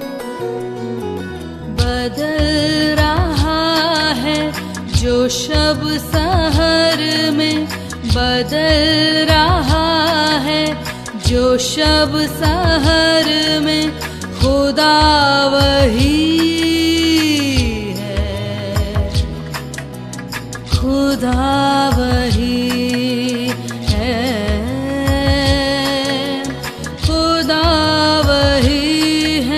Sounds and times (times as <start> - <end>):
Music of Bollywood: 0.0 - 29.5.